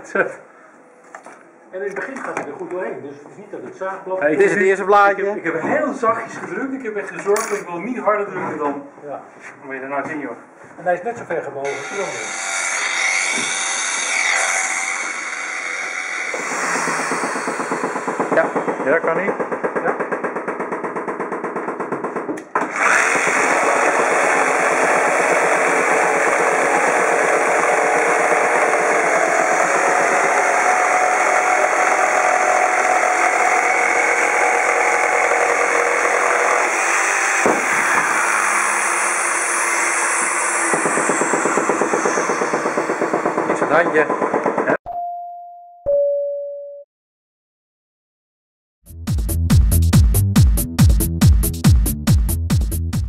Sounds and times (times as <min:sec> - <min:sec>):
Wood: 0:11.2 - 0:44.8
Sawing: 0:11.6 - 0:44.8.